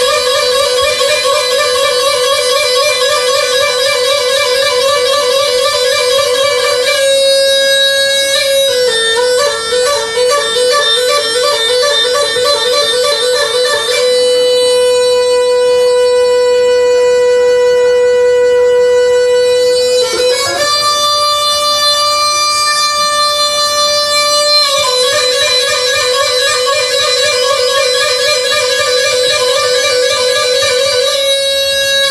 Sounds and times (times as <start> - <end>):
Music: 0.0 - 32.1.